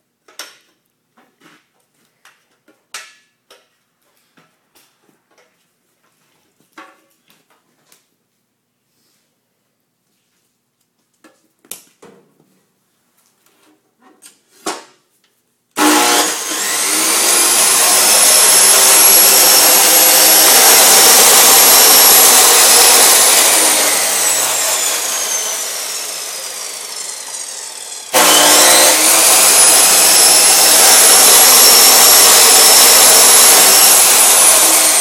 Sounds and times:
Sawing: 15.8 - 35.0.

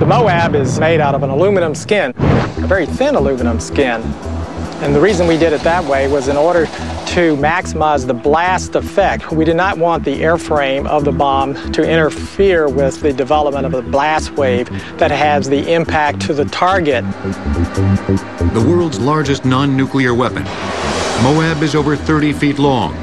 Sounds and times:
Speech: 0.0 - 4.1, 4.8 - 17.0, 18.6 - 20.5, 21.2 - 23.0
Music: 1.4 - 23.0.

